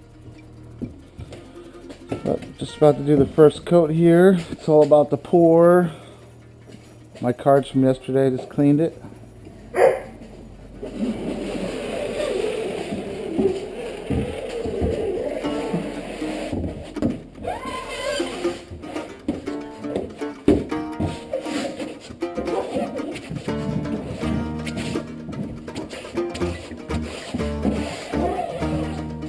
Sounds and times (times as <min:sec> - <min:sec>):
Music: 0:00.0 - 0:07.2, 0:13.5 - 0:29.2.